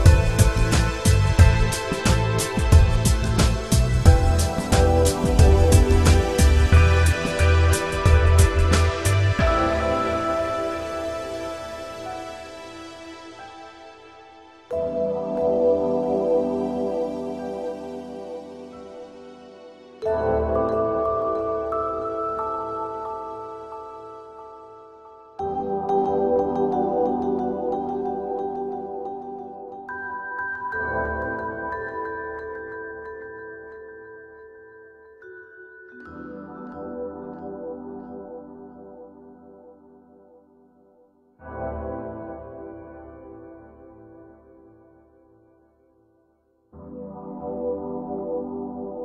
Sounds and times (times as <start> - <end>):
Music: 0.0 - 49.0.